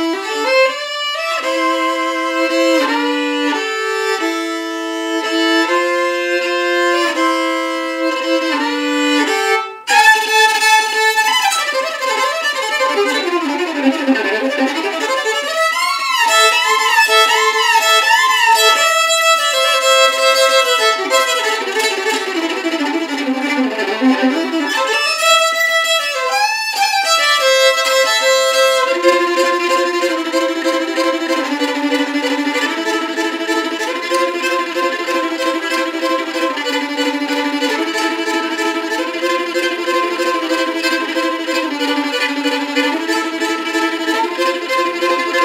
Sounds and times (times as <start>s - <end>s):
Violin, fiddle: 0.0s - 45.4s.